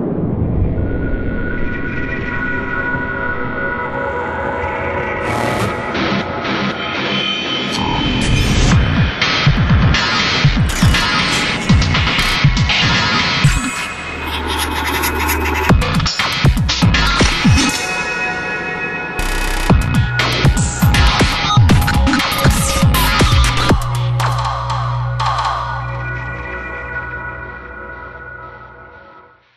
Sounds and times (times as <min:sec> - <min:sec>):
Music: 0:01.8 - 0:29.5.